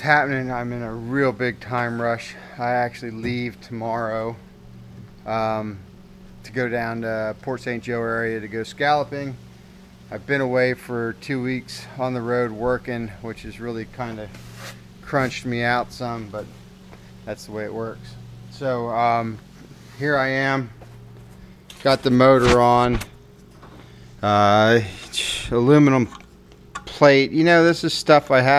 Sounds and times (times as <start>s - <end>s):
Speech: 0.0s - 4.4s, 5.2s - 5.8s, 6.4s - 9.4s, 10.1s - 14.4s, 15.0s - 16.5s, 17.3s - 19.4s, 20.0s - 20.7s, 21.8s - 23.1s, 24.2s - 26.2s, 26.8s - 28.5s.